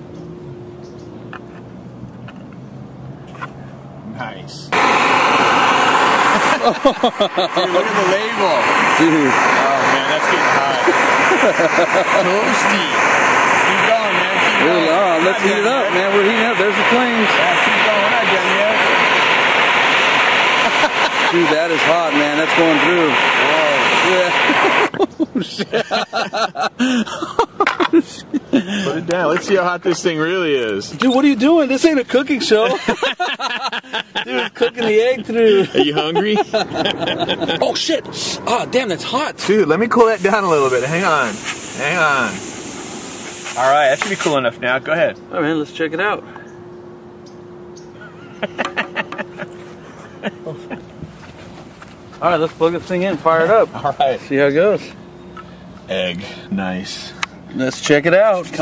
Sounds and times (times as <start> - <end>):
Speech: 4.1 - 4.8, 7.6 - 10.9, 13.7 - 18.8, 21.3 - 24.4, 28.8 - 32.8, 34.3 - 36.5, 37.6 - 42.4, 43.6 - 46.2, 52.2 - 55.0, 55.9 - 58.6.